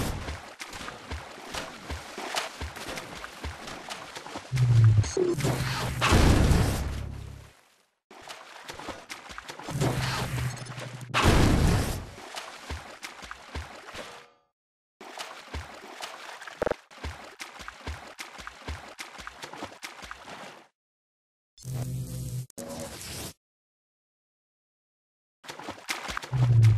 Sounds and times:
Stream: 0.0 - 14.2, 15.0 - 20.7, 25.5 - 26.7.

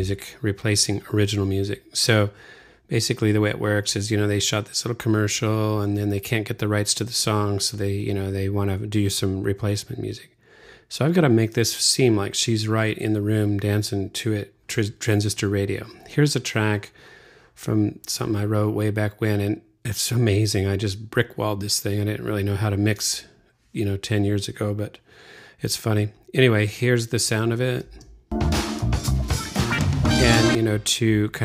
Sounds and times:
Speech: 0.0 - 17.0, 17.6 - 25.0, 25.6 - 28.0, 30.1 - 31.4
Music: 28.3 - 30.7.

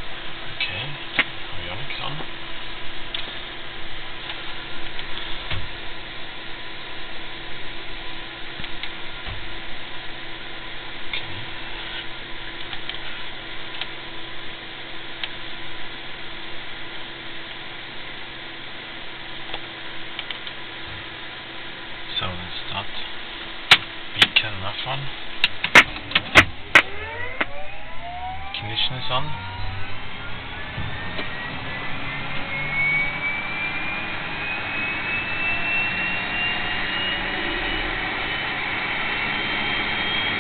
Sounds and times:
Engine: 0.0 - 40.4
Vehicle: 0.0 - 40.4
Speech: 0.6 - 2.3, 22.1 - 23.1, 24.2 - 25.2, 28.6 - 29.4.

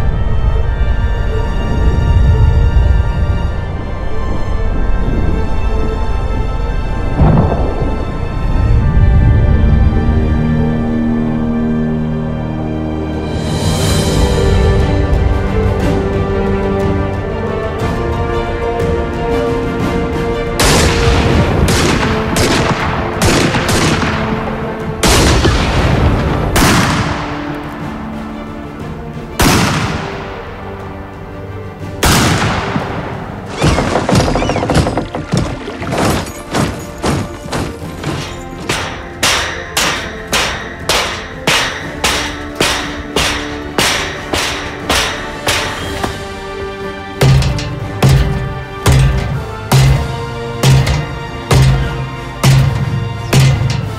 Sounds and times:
Music: 0.0 - 53.9.

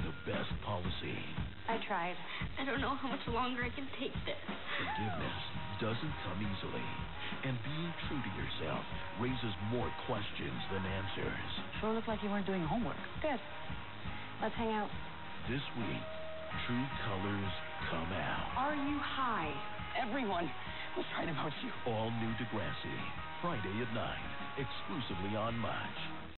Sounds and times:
Speech: 0.0 - 13.4, 15.5 - 26.1
Music: 0.0 - 26.3.

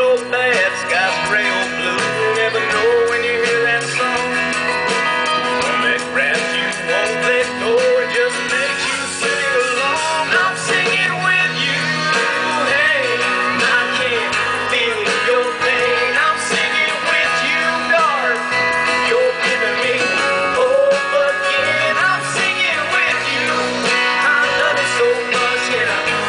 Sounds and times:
Male singing: 0.0 - 4.6, 5.6 - 26.2
Country: 0.0 - 26.2.

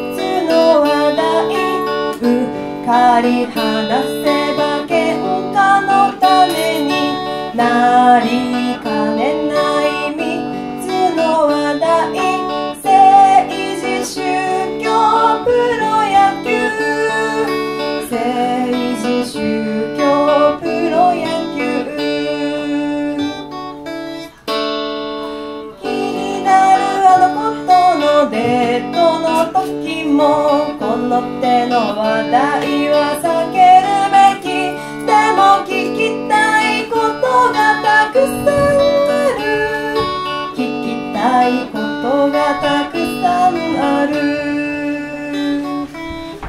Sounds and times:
Music: 0.0 - 46.4.

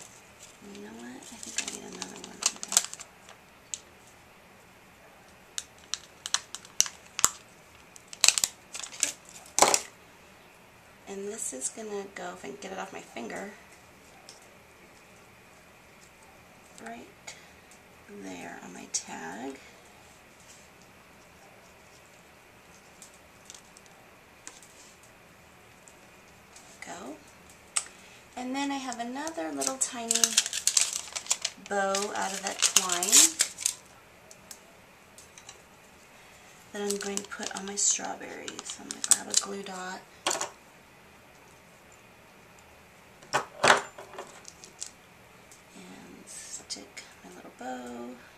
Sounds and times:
Inside, small room: 0.0 - 48.3
Speech: 0.6 - 2.7, 11.1 - 13.6, 18.1 - 19.7, 26.8 - 27.2, 28.4 - 30.4, 31.6 - 33.4, 36.8 - 40.0, 45.7 - 48.2.

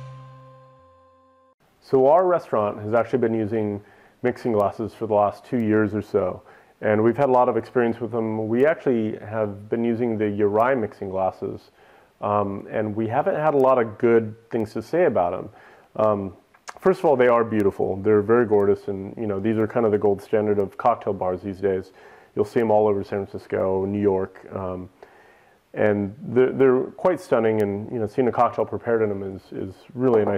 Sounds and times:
Speech: 1.8 - 25.0, 25.7 - 30.3.

